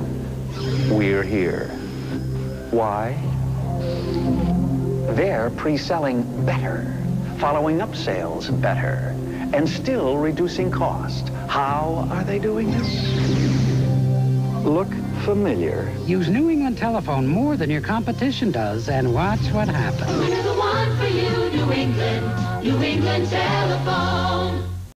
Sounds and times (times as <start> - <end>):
Music: 0.0 - 24.9
Speech: 0.9 - 1.8, 2.8 - 3.2, 14.6 - 20.3.